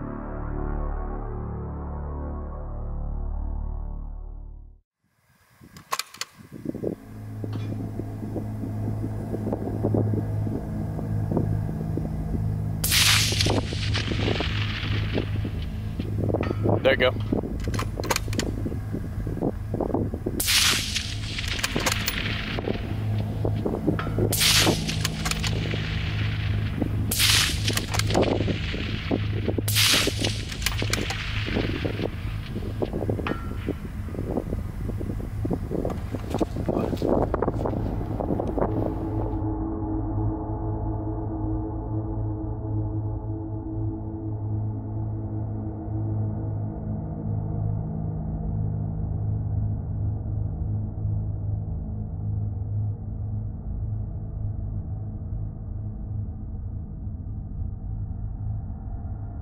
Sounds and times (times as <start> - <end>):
Music: 0.0 - 4.8, 37.4 - 59.4
Flap: 5.7 - 39.4.